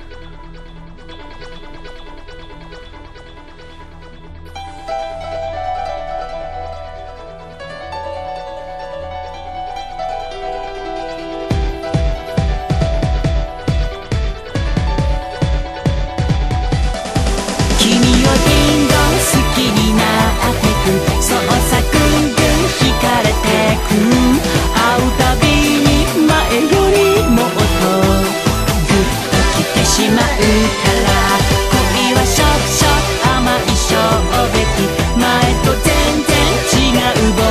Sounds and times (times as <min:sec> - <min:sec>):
Music: 0:00.0 - 0:37.5.